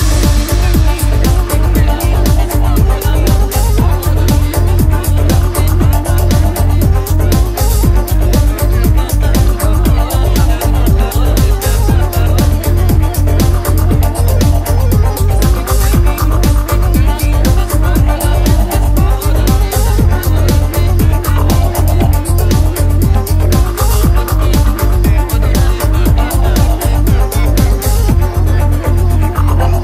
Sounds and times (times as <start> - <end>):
Disco: 0.0 - 29.8.